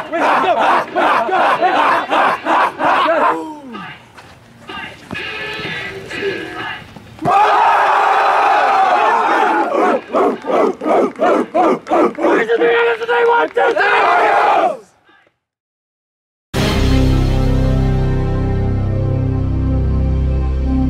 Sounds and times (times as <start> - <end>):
Speech: 3.0 - 4.1, 12.2 - 14.0
Music: 16.6 - 20.8.